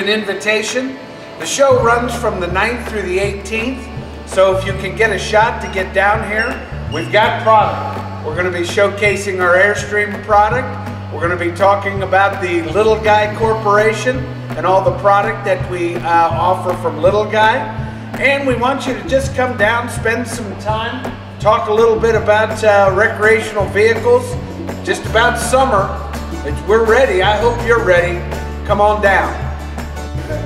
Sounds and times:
Speech: 0.0s - 29.5s
Music: 0.0s - 30.4s.

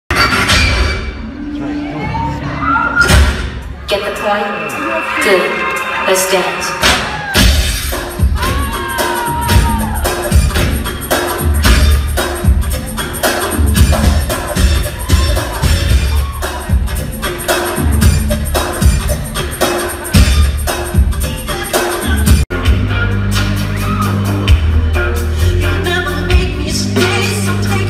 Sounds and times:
Music: 0.1s - 27.8s.

